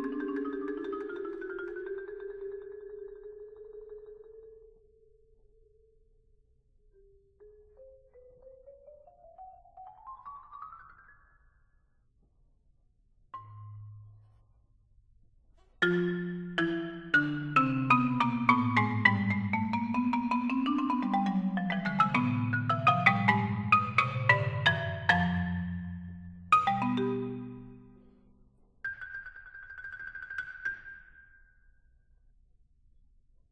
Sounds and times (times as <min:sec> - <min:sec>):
Marimba, xylophone: 0:00.0 - 0:05.9, 0:07.0 - 0:11.6, 0:13.4 - 0:14.3, 0:15.8 - 0:28.2, 0:28.9 - 0:31.6.